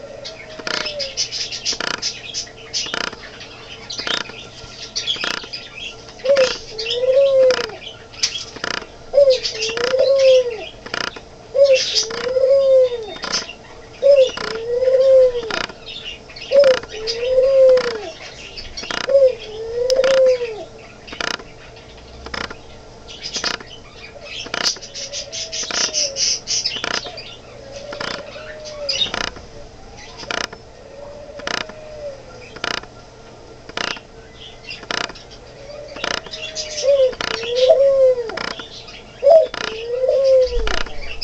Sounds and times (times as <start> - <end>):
Coo: 0.0 - 1.3, 6.2 - 7.9, 9.1 - 10.7, 11.5 - 13.4, 14.0 - 15.6, 16.5 - 18.2, 19.1 - 20.7, 24.2 - 26.4, 27.6 - 29.2, 30.0 - 32.5, 35.5 - 38.6, 39.2 - 41.2.